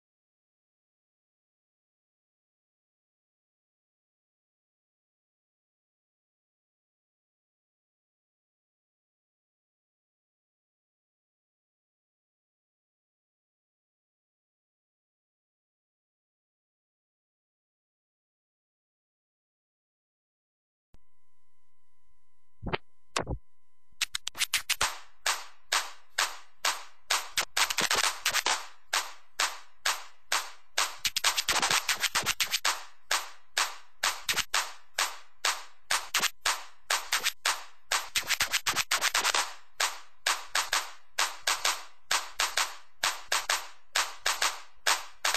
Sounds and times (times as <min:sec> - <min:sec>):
Inside, small room: 0:21.0 - 0:45.3
Silence: 0:21.0 - 0:45.3.